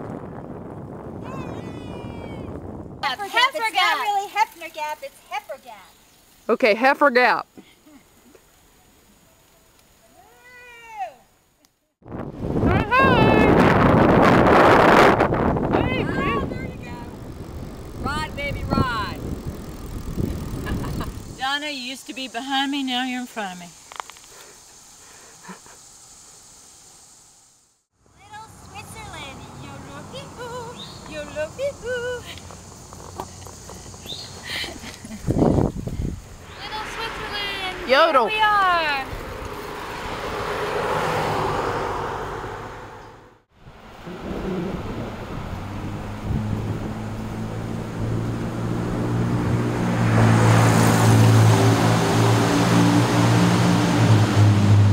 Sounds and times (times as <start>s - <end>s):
Bicycle: 3.2s - 6.4s, 14.8s - 25.6s, 28.9s - 41.3s.